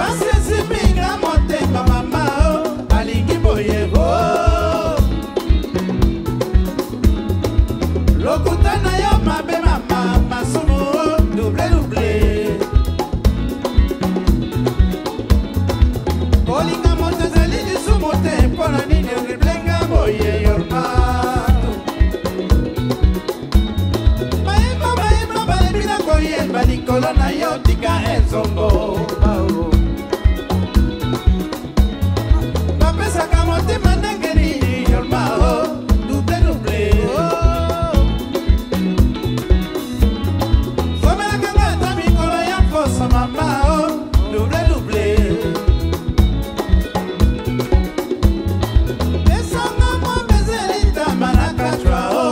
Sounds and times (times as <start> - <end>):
Singing: 0.0 - 5.2, 8.2 - 12.8, 16.5 - 21.9, 24.6 - 30.0, 32.8 - 38.1, 41.0 - 45.8, 49.3 - 52.3
Folk music: 0.0 - 52.3
Jazz: 0.0 - 52.3
Music of Africa: 0.0 - 52.3
Ska: 0.0 - 52.3.